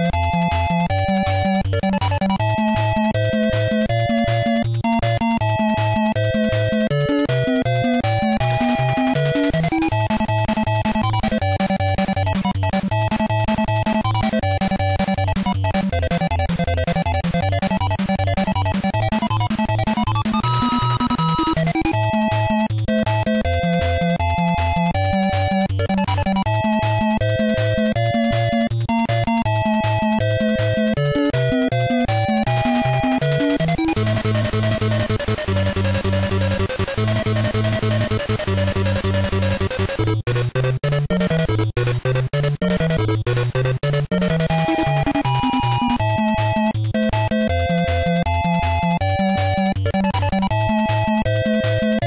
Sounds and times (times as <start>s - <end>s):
Music: 0.0s - 52.0s.